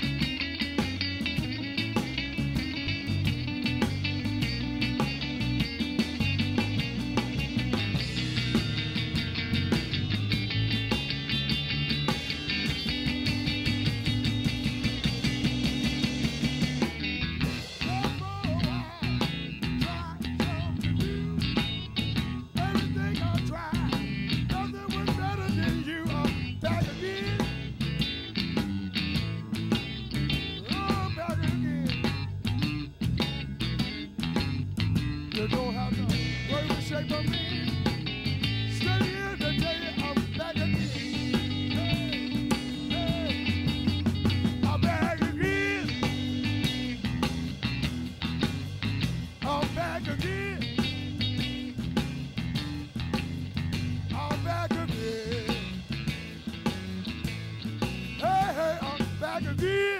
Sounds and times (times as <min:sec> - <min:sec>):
Blues: 0:00.0 - 1:00.0
Guitar: 0:00.0 - 1:00.0
Psychedelic rock: 0:00.0 - 1:00.0
Singing: 0:22.6 - 0:27.6, 0:38.7 - 0:43.6, 0:44.6 - 0:47.0, 0:49.4 - 0:51.2, 0:54.1 - 0:55.7, 0:58.2 - 1:00.0.